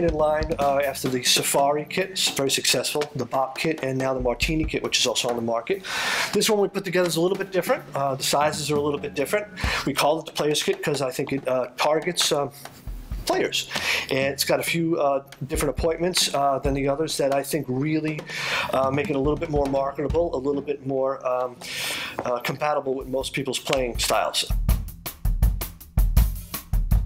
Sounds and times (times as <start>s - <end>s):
Speech: 0.0s - 12.6s, 13.2s - 21.6s, 22.2s - 24.6s
Drum: 0.0s - 27.0s
Drum kit: 0.0s - 27.0s.